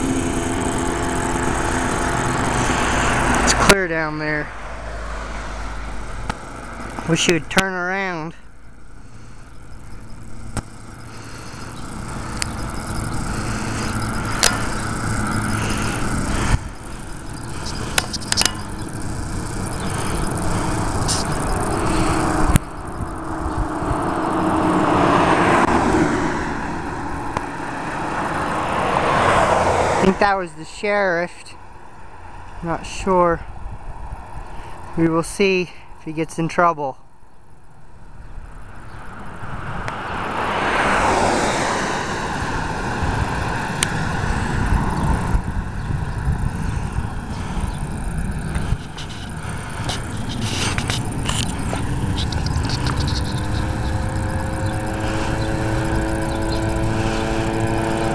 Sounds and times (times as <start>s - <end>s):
Speech: 3.5s - 4.5s, 7.1s - 8.4s, 30.0s - 31.6s, 32.6s - 33.5s, 35.0s - 37.0s.